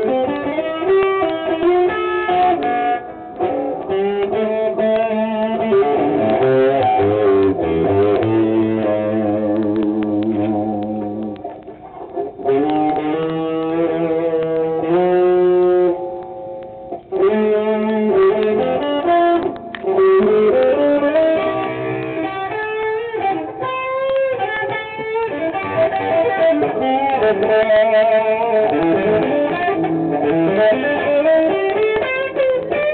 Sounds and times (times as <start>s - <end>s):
Guitar: 0.0s - 32.9s.